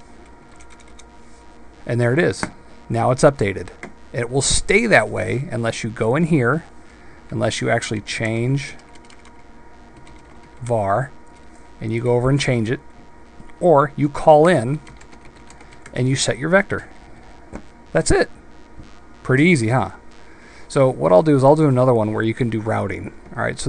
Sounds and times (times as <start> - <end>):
Computer keyboard: 0.5 - 1.1, 8.8 - 9.4, 10.0 - 10.4, 14.9 - 16.0
Speech: 1.9 - 6.7, 7.3 - 8.8, 10.6 - 11.1, 11.8 - 12.8, 13.6 - 14.8, 15.9 - 16.9, 18.0 - 18.3, 19.2 - 20.0, 20.7 - 23.6.